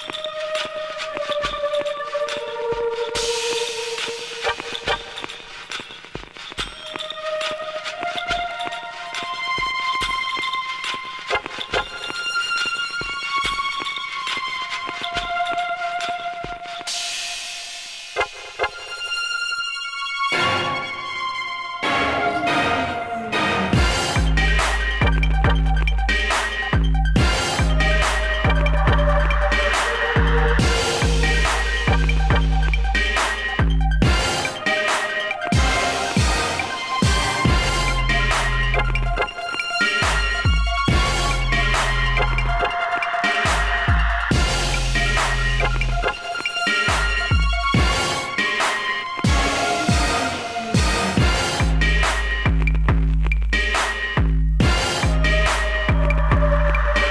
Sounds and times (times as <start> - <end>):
Music: 0.0 - 57.1.